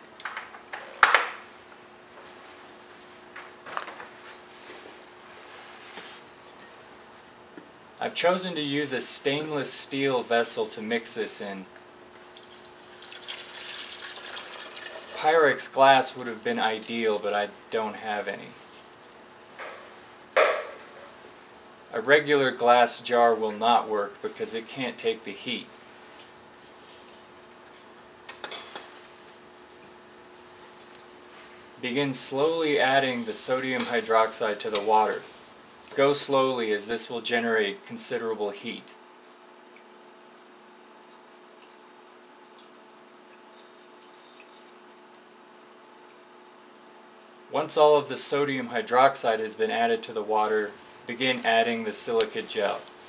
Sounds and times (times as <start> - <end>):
Speech: 8.0 - 11.7, 15.2 - 18.6, 21.9 - 25.7, 31.8 - 35.3, 36.0 - 39.0, 47.5 - 52.9.